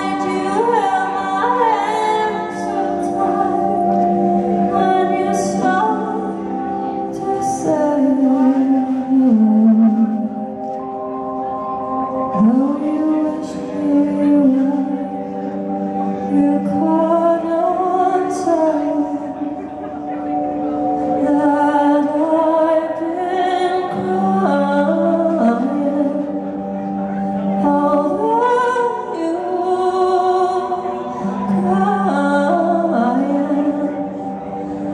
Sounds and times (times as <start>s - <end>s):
Music: 0.0s - 34.9s.